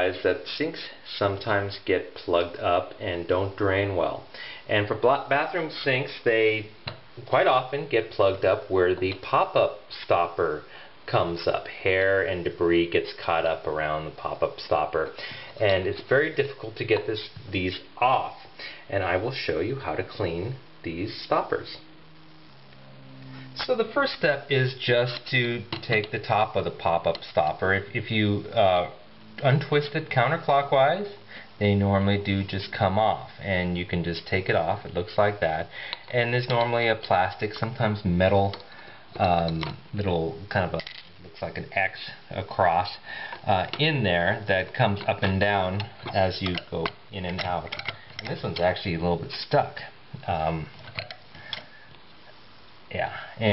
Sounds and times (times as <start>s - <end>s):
Speech: 0.0s - 21.9s, 23.6s - 50.8s, 52.9s - 53.5s.